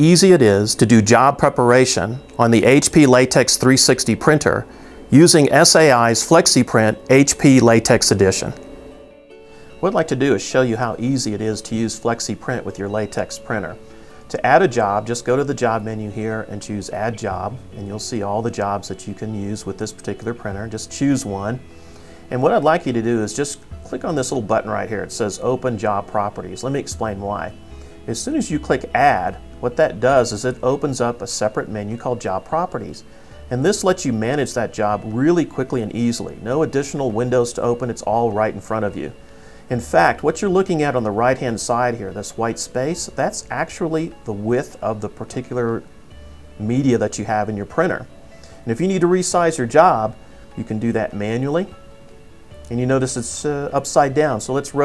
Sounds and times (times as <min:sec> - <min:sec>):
Speech: 0:00.0 - 0:08.6, 0:09.8 - 0:21.6, 0:22.3 - 0:45.8, 0:46.6 - 0:48.1, 0:48.7 - 0:51.7, 0:52.7 - 0:54.8
Music: 0:00.0 - 0:54.8.